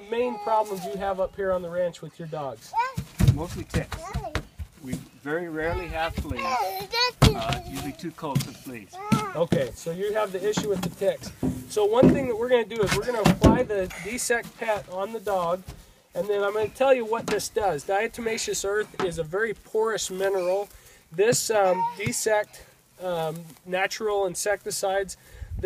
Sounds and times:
Speech: 0:00.0 - 0:02.7, 0:09.4 - 0:15.6, 0:16.2 - 0:25.6.

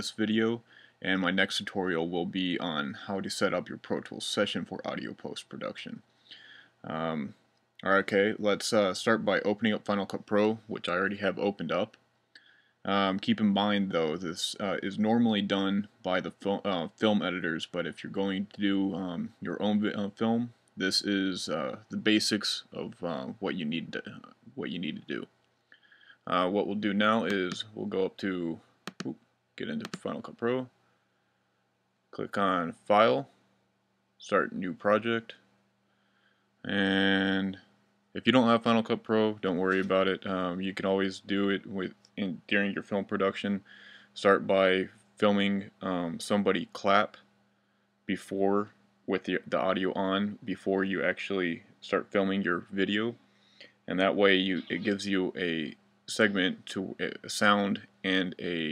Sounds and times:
Speech: 0:00.0 - 0:06.0, 0:06.8 - 0:12.0, 0:12.9 - 0:25.3, 0:26.2 - 0:30.8, 0:32.2 - 0:33.4, 0:34.2 - 0:35.5, 0:36.6 - 0:47.2, 0:48.1 - 0:53.2, 0:53.9 - 0:58.7.

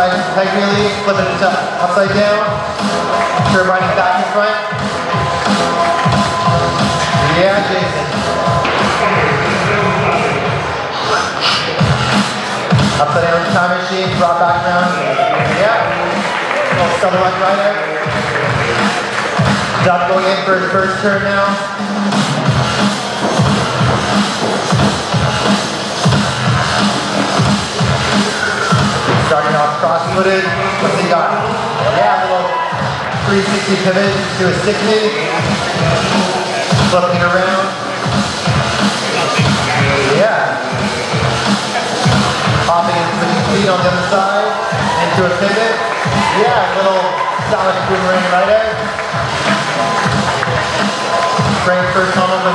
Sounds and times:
Speech: 0:00.0 - 0:02.6, 0:03.4 - 0:04.8, 0:07.1 - 0:08.2, 0:08.8 - 0:12.0, 0:13.0 - 0:19.1, 0:19.7 - 0:21.7, 0:29.1 - 0:38.2, 0:39.0 - 0:48.9, 0:51.6 - 0:52.5
Inside, public space: 0:00.0 - 0:52.5
Music: 0:00.0 - 0:52.5.

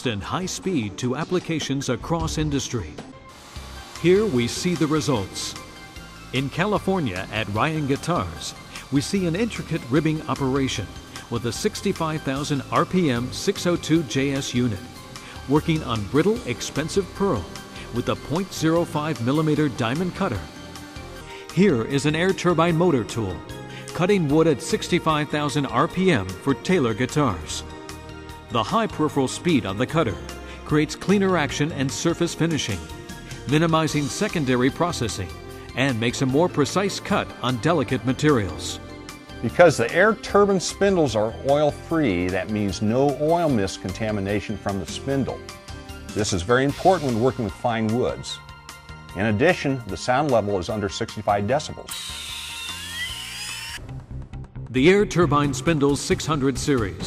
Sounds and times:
Speech: 0:00.0 - 0:03.0, 0:04.0 - 0:05.6, 0:06.4 - 0:14.8, 0:15.5 - 0:20.5, 0:21.6 - 0:23.4, 0:24.0 - 0:27.6, 0:28.5 - 0:32.9, 0:33.5 - 0:38.8, 0:39.4 - 0:45.4, 0:46.1 - 0:48.4, 0:49.2 - 0:51.9, 0:54.7 - 0:57.0
Music: 0:00.0 - 0:57.0.

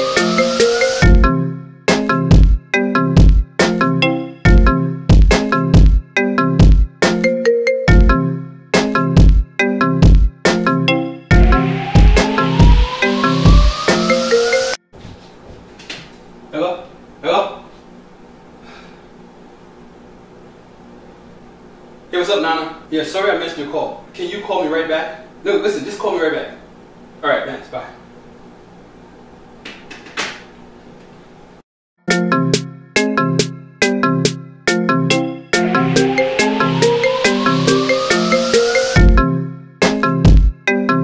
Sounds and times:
Speech: 0:16.5 - 0:17.8, 0:22.1 - 0:26.6, 0:27.2 - 0:28.0.

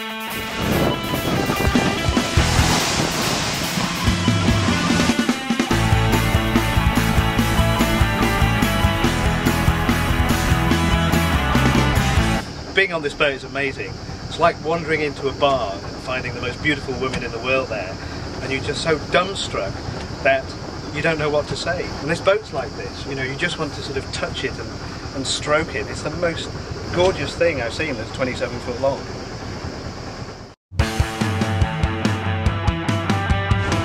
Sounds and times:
Music: 0:00.0 - 0:12.5, 0:30.7 - 0:33.8
Speech: 0:12.7 - 0:29.1.

